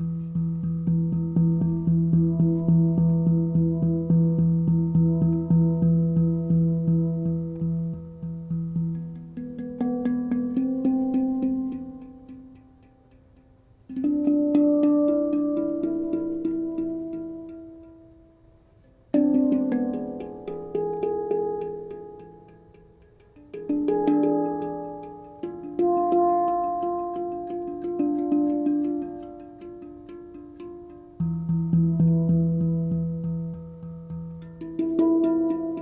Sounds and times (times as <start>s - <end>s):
Music: 0.0s - 35.8s.